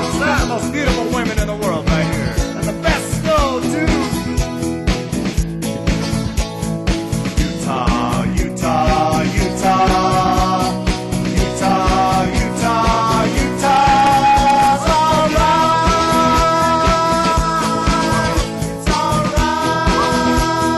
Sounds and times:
Music: 0.0s - 20.7s
Singing: 7.6s - 20.7s.

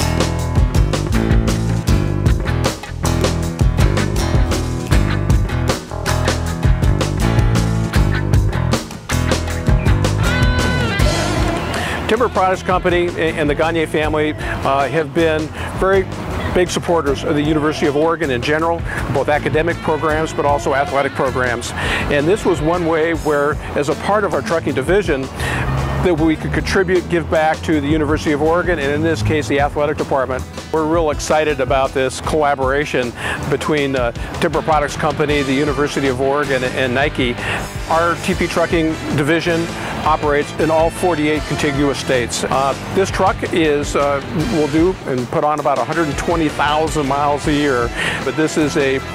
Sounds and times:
Music: 0.0s - 49.1s
Speech: 12.1s - 25.3s, 26.0s - 49.0s
Vehicle: 14.0s - 19.3s, 23.5s - 30.4s.

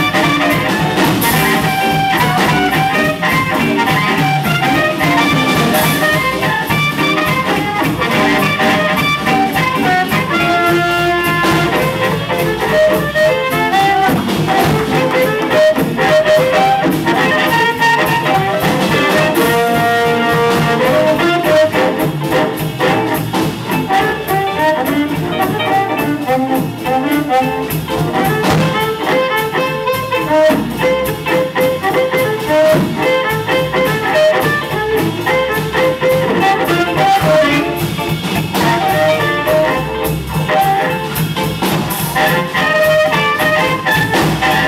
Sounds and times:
Wind instrument, woodwind instrument: 0.0s - 44.6s.

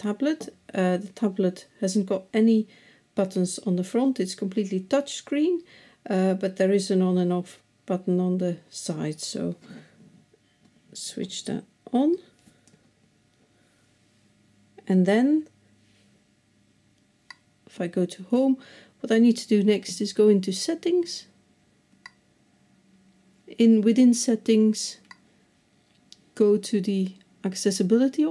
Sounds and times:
Speech: 0.0s - 9.6s, 11.0s - 12.4s, 14.8s - 15.6s, 17.7s - 21.4s, 23.5s - 25.1s, 26.4s - 28.3s.

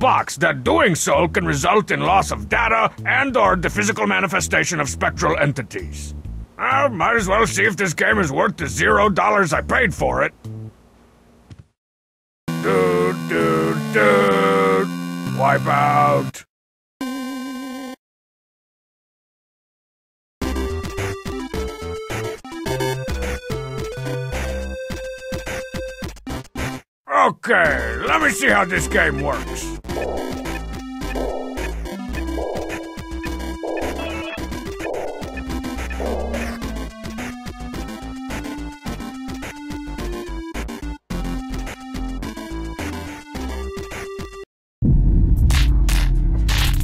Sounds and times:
Speech: 0.0s - 10.3s, 12.6s - 16.5s, 27.1s - 29.8s
Music: 0.1s - 10.7s, 12.5s - 16.4s, 20.4s - 26.8s, 27.6s - 44.5s.

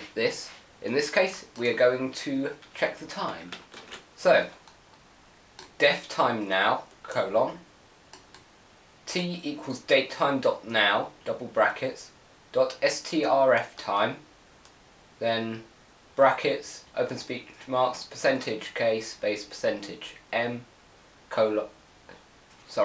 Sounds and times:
Speech: 0.0s - 3.6s, 4.2s - 4.6s, 5.8s - 7.7s, 9.1s - 14.3s, 15.2s - 20.7s, 21.3s - 21.8s.

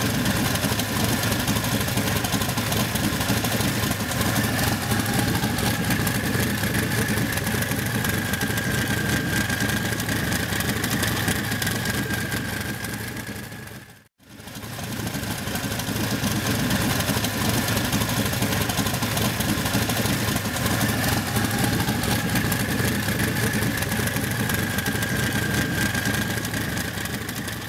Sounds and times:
Heavy engine (low frequency): 0.0s - 27.6s.

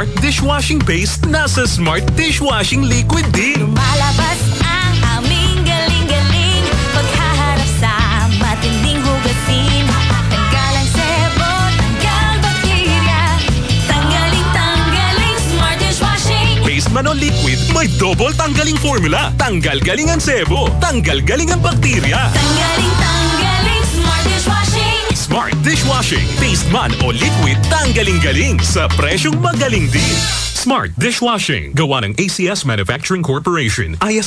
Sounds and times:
Speech: 0.0s - 3.8s, 16.6s - 22.4s, 25.2s - 34.2s
Music: 0.0s - 32.2s.

